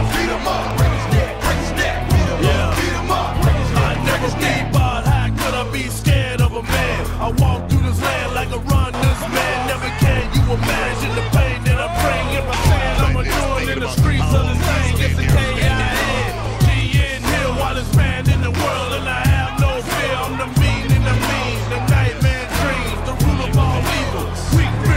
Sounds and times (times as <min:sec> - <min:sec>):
Music: 0:00.0 - 0:24.9.